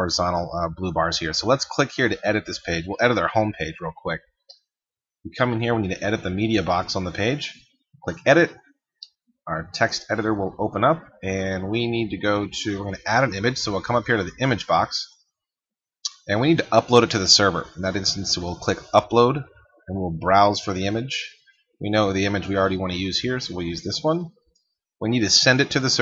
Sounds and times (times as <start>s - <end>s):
Speech: 0.0s - 4.2s, 5.3s - 8.6s, 9.5s - 15.2s, 16.1s - 24.4s, 25.0s - 26.0s.